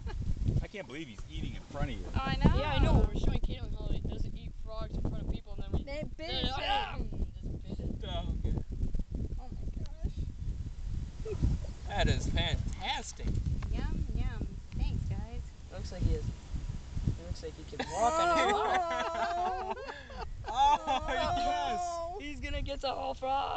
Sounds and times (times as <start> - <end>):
Speech: 0.6 - 7.2, 17.3 - 19.9, 20.5 - 23.5.